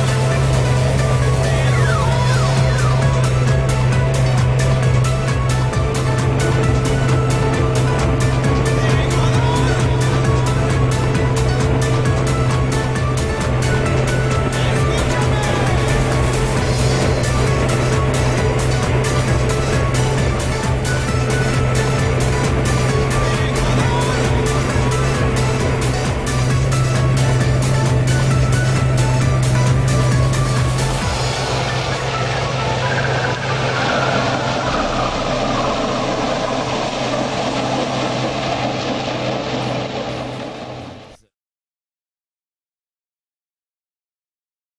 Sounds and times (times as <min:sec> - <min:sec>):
Music: 0:00.0 - 0:41.3
Outside, rural or natural: 0:00.0 - 0:41.3
Vehicle: 0:00.0 - 0:41.3.